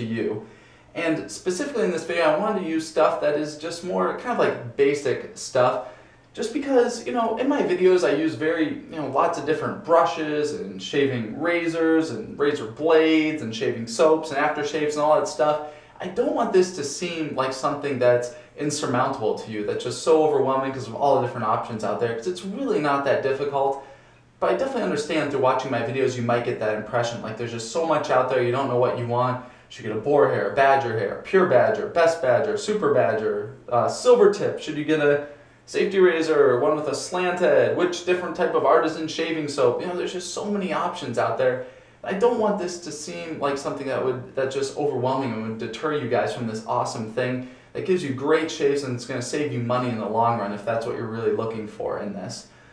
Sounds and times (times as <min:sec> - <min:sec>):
Speech: 0:00.0 - 0:52.6.